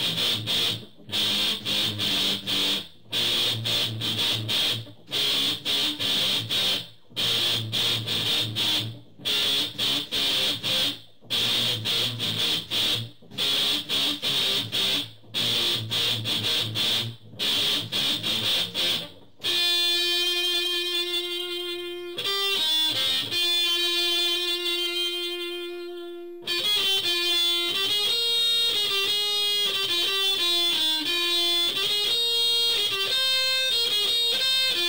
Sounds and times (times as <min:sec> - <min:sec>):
Electric guitar: 0:00.0 - 0:34.8.